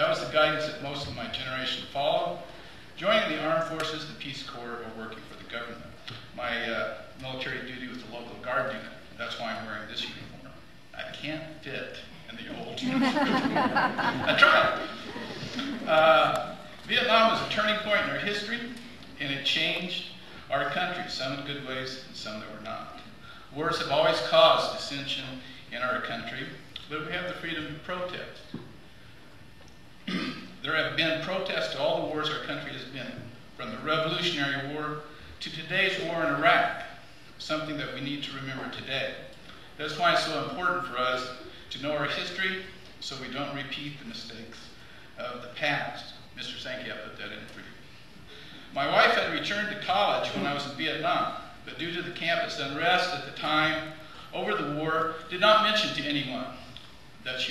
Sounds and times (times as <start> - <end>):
Male speech, man speaking: 0.0 - 13.0, 14.3 - 15.0, 15.9 - 28.5, 30.6 - 47.8, 48.8 - 57.5
Narration, monologue: 0.0 - 57.5.